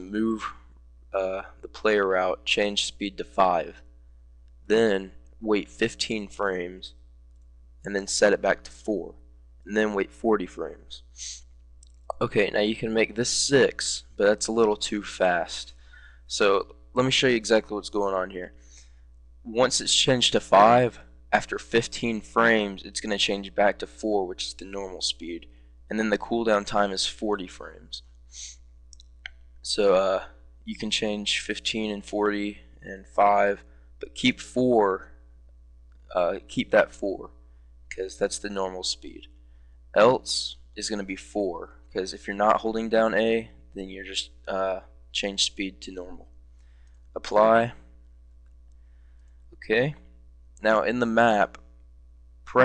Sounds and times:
Speech: 0:00.0 - 0:03.9, 0:04.7 - 0:07.0, 0:07.9 - 0:11.4, 0:12.1 - 0:18.6, 0:19.5 - 0:28.5, 0:29.6 - 0:35.2, 0:36.1 - 0:39.3, 0:40.0 - 0:46.3, 0:47.2 - 0:47.9, 0:49.6 - 0:51.6.

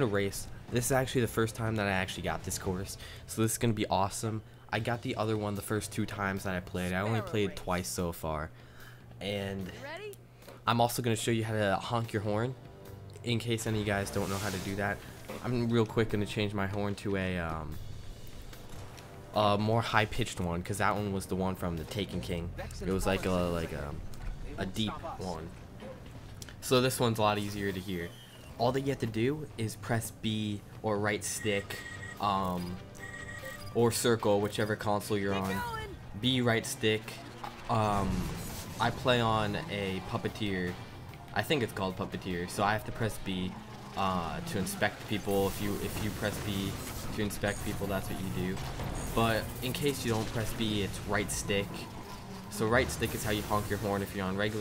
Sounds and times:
Speech: 0:00.0 - 0:08.5, 0:13.2 - 0:17.8, 0:19.4 - 0:24.0, 0:26.6 - 0:32.8, 0:33.8 - 0:40.8, 0:41.4 - 0:48.6, 0:49.2 - 0:51.9, 0:52.5 - 0:54.6
Music: 0:00.0 - 0:54.6.

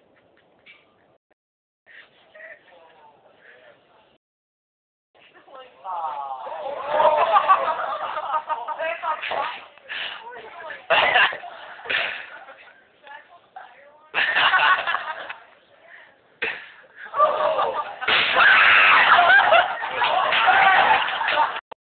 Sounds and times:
Burst, pop: 0:18.0 - 0:18.6.

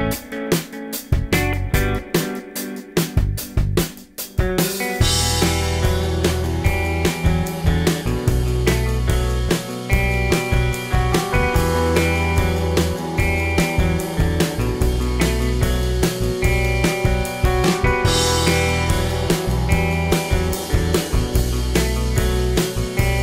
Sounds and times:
Music: 0:00.0 - 0:23.2.

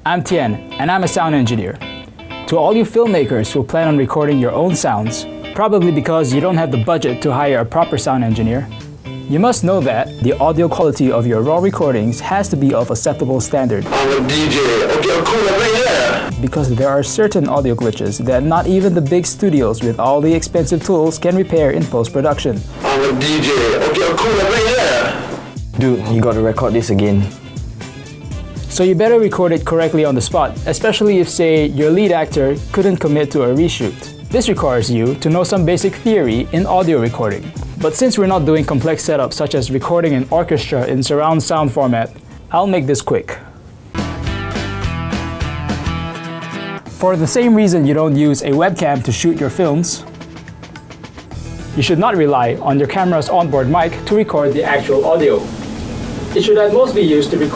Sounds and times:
Speech: 0:00.0 - 0:01.8, 0:02.5 - 0:08.7, 0:09.3 - 0:27.4, 0:28.7 - 0:43.5, 0:47.0 - 0:50.1, 0:51.8 - 0:55.4, 0:56.3 - 0:57.5
Music: 0:00.0 - 0:57.5.

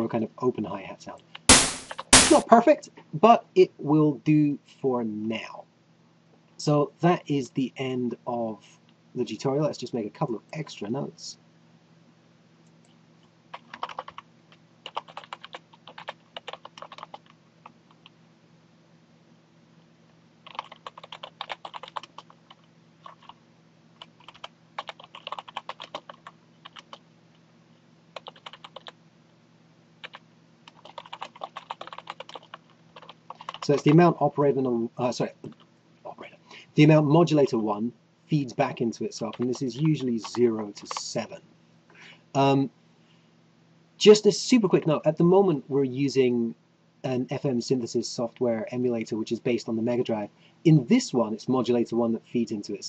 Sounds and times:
Computer keyboard: 0:13.5 - 0:18.2, 0:20.5 - 0:23.4, 0:24.0 - 0:27.0, 0:28.2 - 0:29.0, 0:30.0 - 0:34.0, 0:39.3 - 0:41.0.

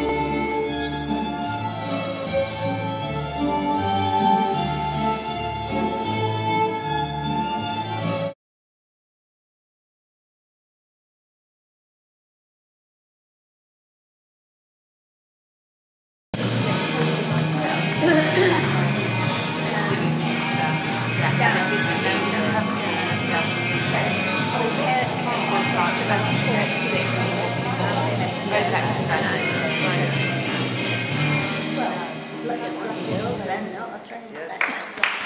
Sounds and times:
Music: 0:00.0 - 0:08.4, 0:16.4 - 0:35.2
Speech: 0:16.4 - 0:30.6, 0:31.7 - 0:35.2.

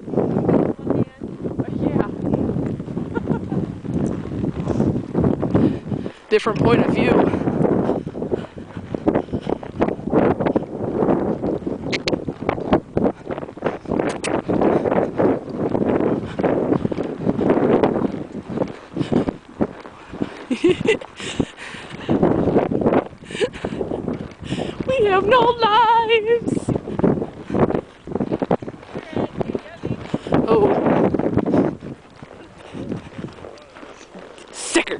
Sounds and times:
Clip-clop: 0:00.0 - 0:34.9.

